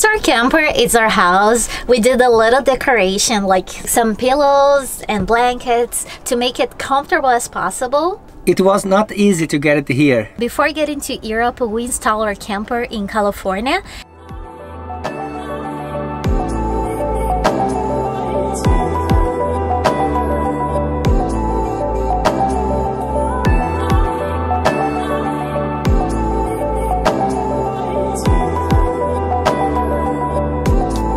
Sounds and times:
Music: 14.0 - 31.1.

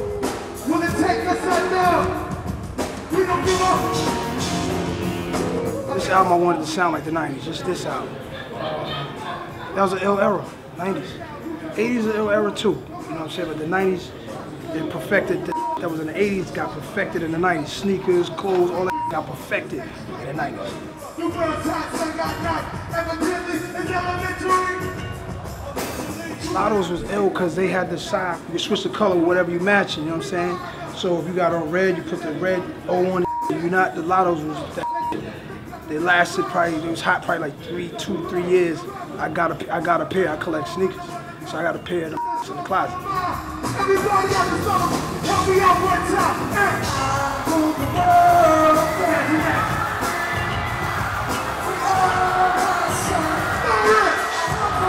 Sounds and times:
Music: 0.0 - 54.8
Speech: 26.4 - 46.8.

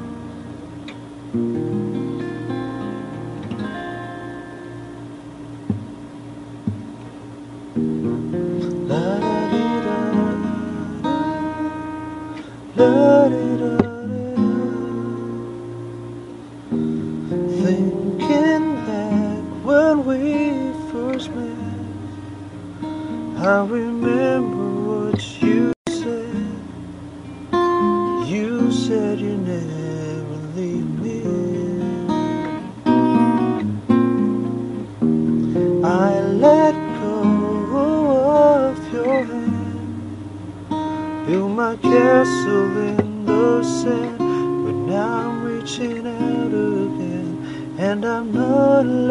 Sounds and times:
Acoustic guitar: 0.0 - 49.1
Strum: 0.0 - 49.1.

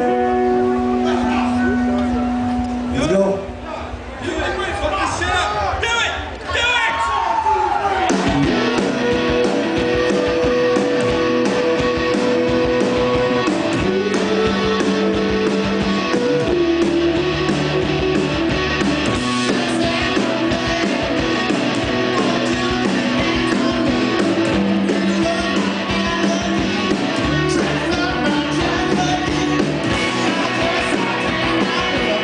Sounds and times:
Music: 0.0 - 3.2, 8.0 - 32.2.

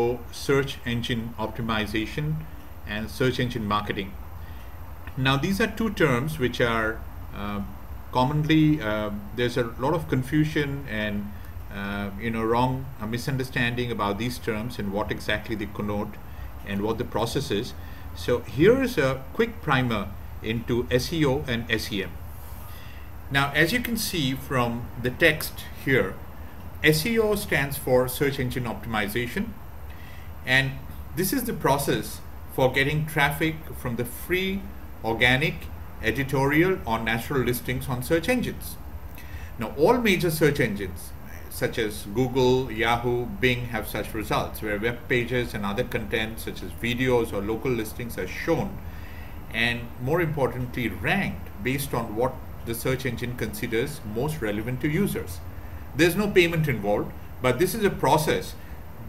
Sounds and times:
Speech: 0.0 - 4.2, 5.1 - 22.2, 23.3 - 26.2, 26.8 - 29.6, 30.5 - 38.8, 39.6 - 48.8, 49.5 - 55.4, 56.0 - 59.0.

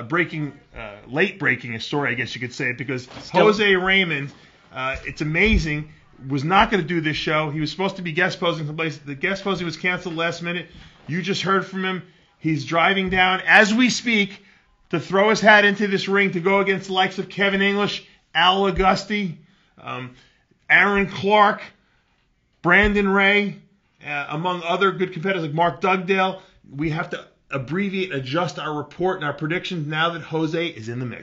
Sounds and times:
Speech: 0.0 - 21.8, 22.6 - 31.2.

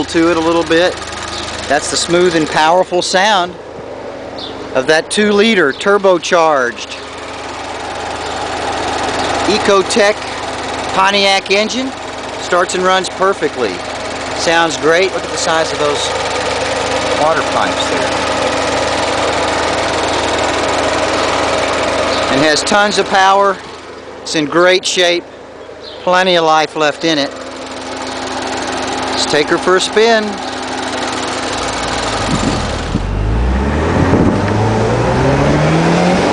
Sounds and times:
Speech: 0.0 - 1.0, 1.7 - 3.6, 4.8 - 7.0, 9.5 - 10.2, 10.9 - 13.8, 14.4 - 16.2, 17.2 - 18.2, 22.3 - 23.6, 24.3 - 25.3, 26.0 - 27.4, 29.2 - 30.4
Car: 0.0 - 36.3.

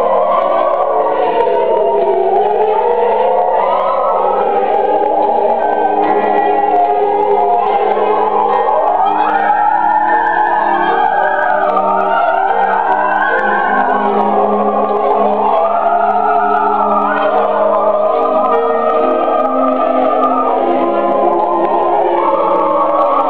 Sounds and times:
Choir: 0.0 - 23.3
Gospel music: 0.0 - 23.3
Opera: 0.0 - 23.3.

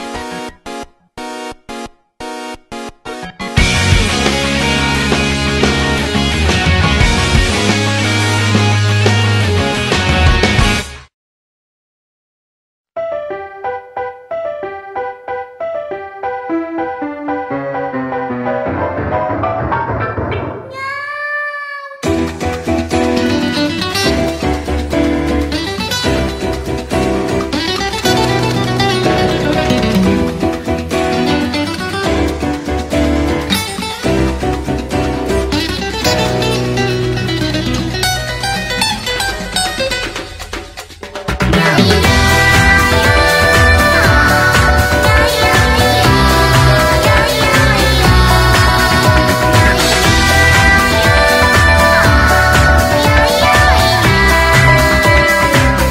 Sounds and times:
Music: 0.0 - 11.1, 13.0 - 20.8, 22.0 - 55.9.

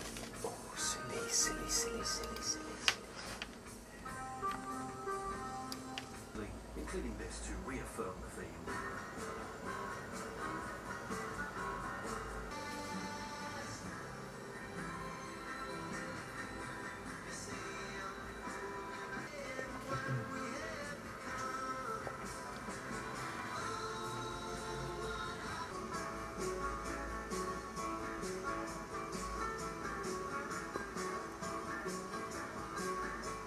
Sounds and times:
Music: 0.0 - 33.4.

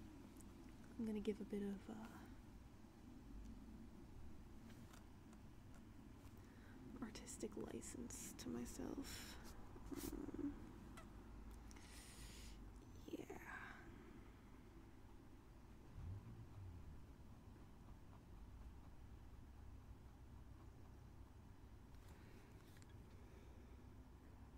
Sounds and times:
Whispering: 1.0 - 2.3, 6.9 - 10.7, 12.9 - 14.1.

